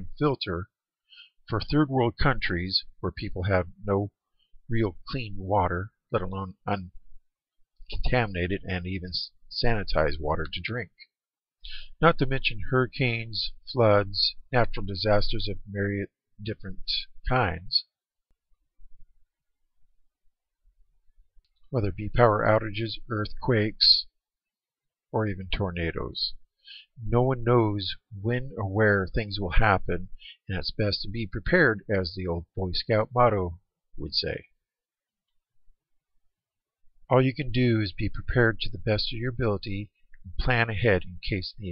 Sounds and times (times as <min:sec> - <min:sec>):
Speech: 0:00.0 - 0:00.8, 0:01.5 - 0:07.0, 0:07.8 - 0:11.1, 0:11.9 - 0:18.0, 0:21.7 - 0:24.2, 0:25.1 - 0:34.6, 0:37.1 - 0:41.7.